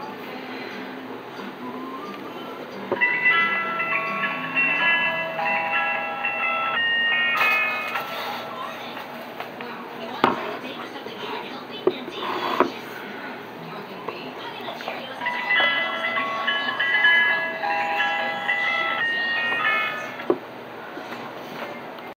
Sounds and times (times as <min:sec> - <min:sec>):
Television: 0:00.0 - 0:22.1
Speech: 0:08.1 - 0:20.2.